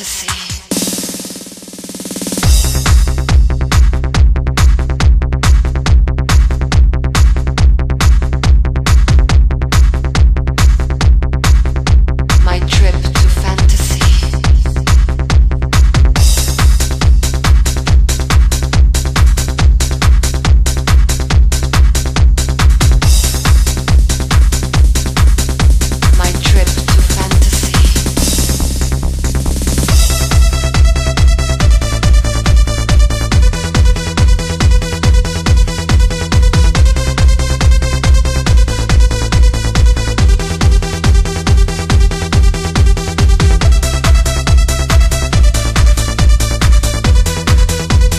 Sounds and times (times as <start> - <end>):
Speech: 0.0 - 0.7, 12.4 - 14.6, 26.1 - 28.0
Techno: 0.0 - 48.1
Trance music: 0.0 - 48.1.